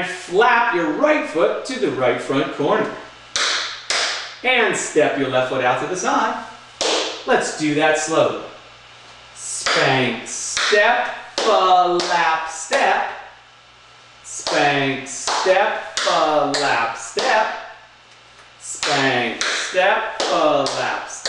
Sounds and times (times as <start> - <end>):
Speech: 0.0 - 3.1, 4.4 - 6.6, 7.3 - 8.6, 9.4 - 13.3, 14.3 - 17.8, 18.6 - 21.2.